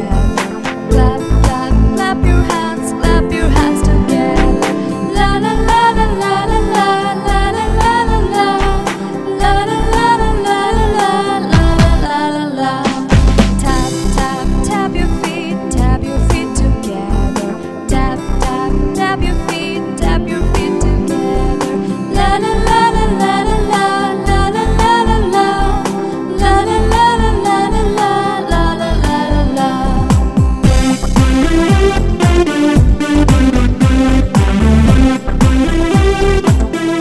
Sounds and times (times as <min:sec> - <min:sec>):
Music for children: 0:00.0 - 0:12.1, 0:12.8 - 0:37.0
Singing: 0:01.0 - 0:21.4.